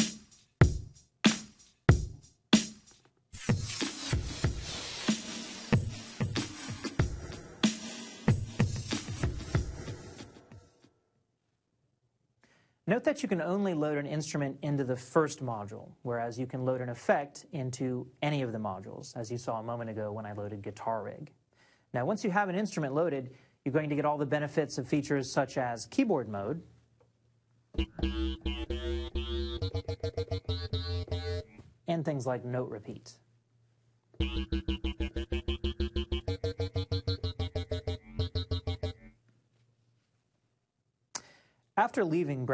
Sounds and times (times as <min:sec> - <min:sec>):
Speech: 0:12.9 - 0:26.7, 0:31.9 - 0:33.3, 0:41.8 - 0:42.5.